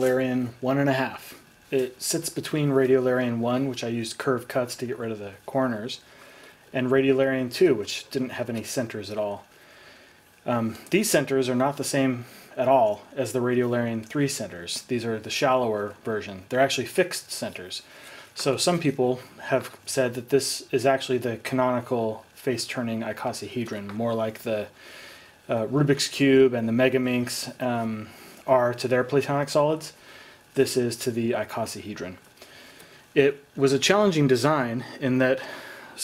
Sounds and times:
Speech: 0:00.0 - 0:06.1, 0:06.7 - 0:09.5, 0:10.4 - 0:24.8, 0:25.5 - 0:30.0, 0:30.6 - 0:32.2, 0:33.2 - 0:36.0.

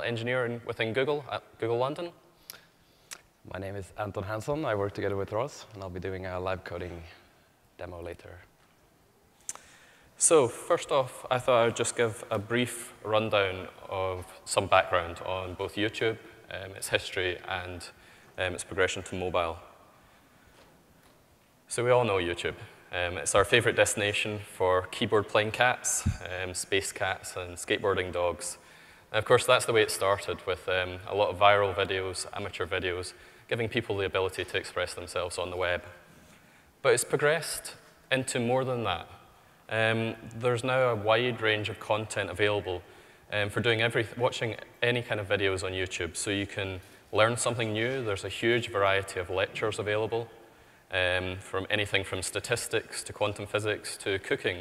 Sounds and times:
Speech: 0:00.0 - 0:02.2, 0:03.5 - 0:08.5, 0:10.2 - 0:19.8, 0:21.7 - 0:36.0, 0:36.8 - 0:54.6.

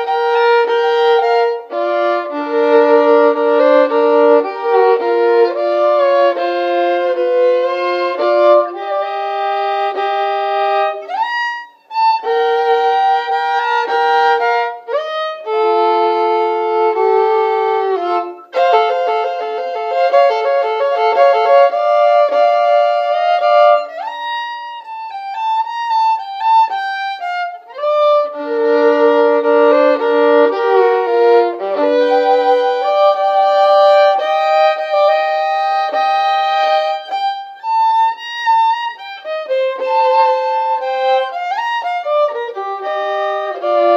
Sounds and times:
Violin, fiddle: 0:00.0 - 0:43.9.

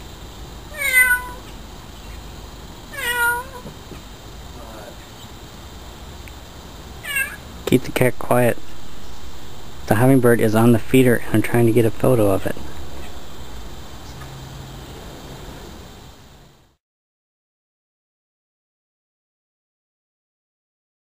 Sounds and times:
Speech: 0:04.6 - 0:05.0, 0:07.7 - 0:08.6, 0:09.9 - 0:12.6.

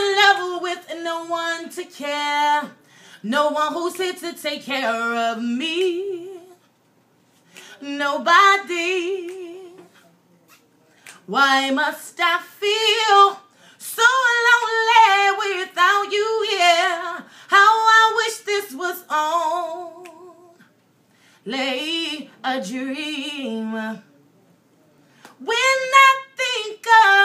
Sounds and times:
Female singing: 0:00.0 - 0:06.7, 0:07.8 - 0:10.0, 0:11.0 - 0:20.7, 0:21.4 - 0:24.1, 0:25.3 - 0:27.2.

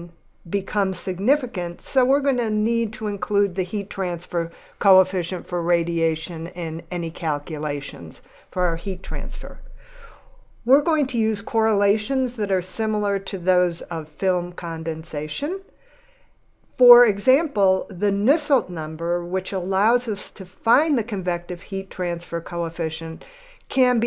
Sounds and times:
Speech: 0:00.0 - 0:09.6, 0:10.7 - 0:15.7, 0:16.8 - 0:24.0.

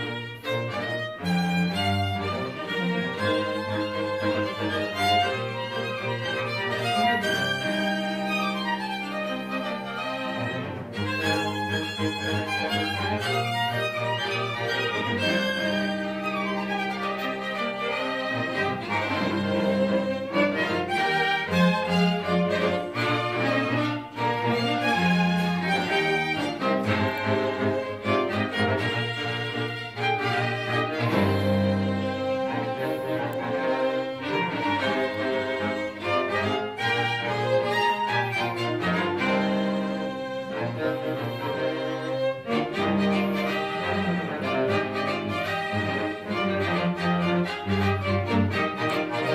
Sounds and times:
Violin, fiddle: 0:00.0 - 0:49.3.

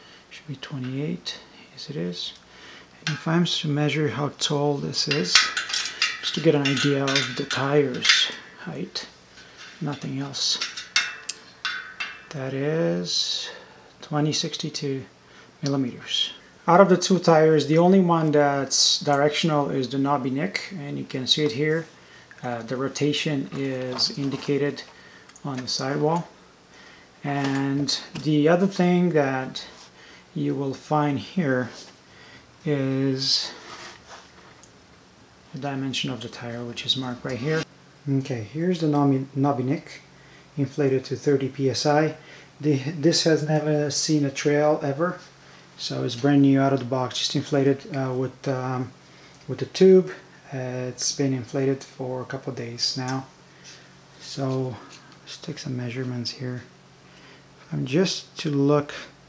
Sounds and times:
Inside, small room: 0:00.0 - 0:59.2
Speech: 0:00.3 - 0:02.4, 0:03.0 - 0:05.6, 0:06.2 - 0:09.2, 0:09.8 - 0:10.7, 0:12.3 - 0:26.4, 0:27.2 - 0:29.8, 0:30.4 - 0:31.9, 0:32.6 - 0:33.6, 0:35.5 - 0:53.3, 0:54.2 - 0:56.7, 0:57.6 - 0:59.2.

